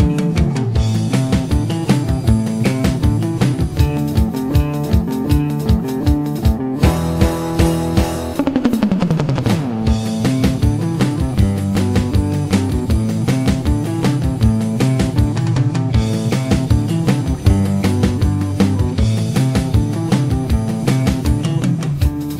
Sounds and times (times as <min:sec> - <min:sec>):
Strum: 0:00.0 - 0:22.3.